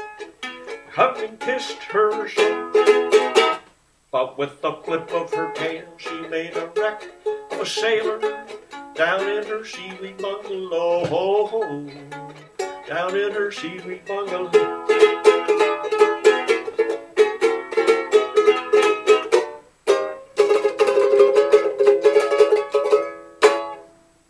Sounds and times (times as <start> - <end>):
Mandolin: 0.0 - 3.7, 4.5 - 24.3.